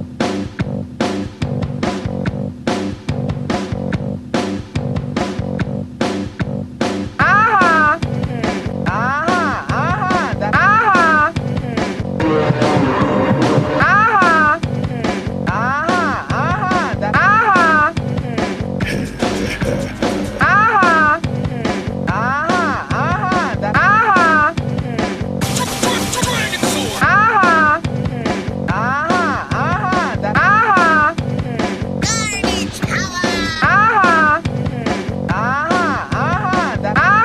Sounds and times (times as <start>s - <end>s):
Music: 0.0s - 37.2s
Speech: 7.2s - 12.0s, 13.8s - 37.2s.